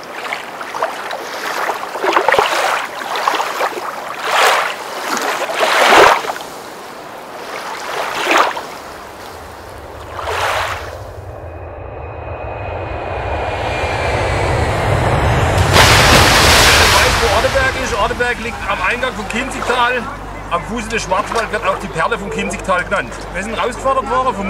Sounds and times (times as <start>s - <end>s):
Stream: 0.0s - 11.3s, 15.6s - 24.5s
Speech: 16.7s - 24.5s.